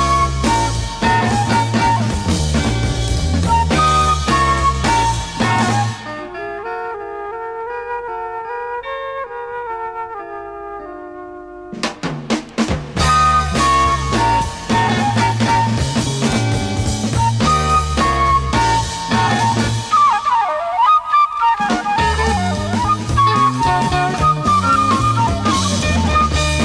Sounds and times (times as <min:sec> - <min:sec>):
Music: 0:00.0 - 0:26.6.